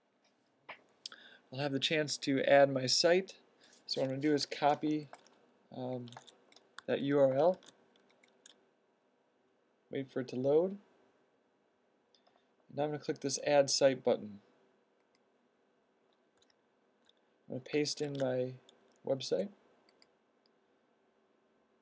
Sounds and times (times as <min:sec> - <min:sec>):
Speech: 0:01.6 - 0:05.1, 0:05.7 - 0:06.2, 0:06.9 - 0:07.6, 0:09.9 - 0:10.8, 0:12.7 - 0:14.4, 0:17.5 - 0:19.6.